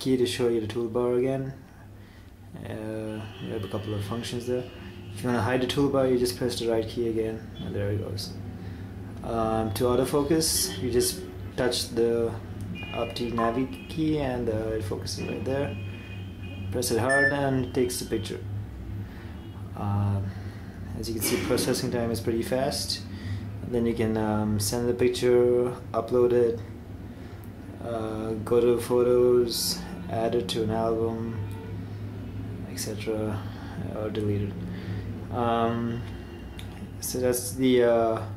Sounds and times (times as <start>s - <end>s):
Speech: 0.0s - 1.6s, 2.6s - 8.4s, 9.2s - 12.4s, 13.0s - 15.8s, 16.7s - 18.5s, 19.8s - 20.3s, 21.0s - 26.7s, 27.8s - 31.5s, 32.6s - 34.6s, 35.3s - 36.1s, 37.0s - 38.3s.